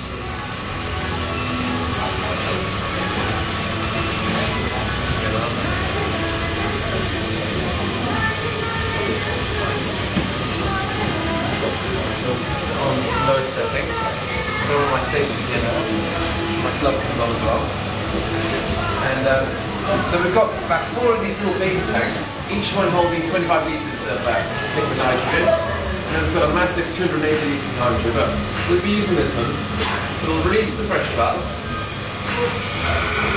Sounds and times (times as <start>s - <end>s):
Music: 0.0s - 33.3s.